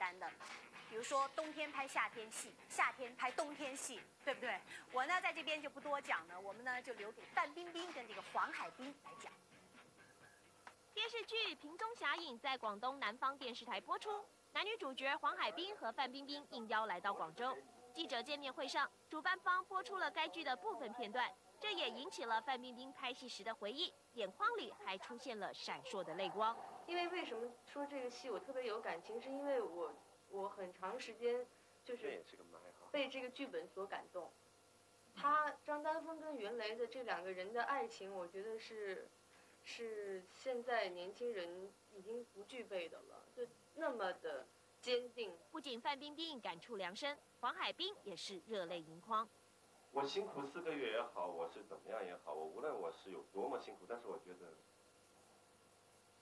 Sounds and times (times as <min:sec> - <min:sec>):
Speech: 0:00.0 - 0:09.4, 0:11.0 - 0:34.3, 0:35.2 - 0:39.1, 0:39.7 - 0:49.3.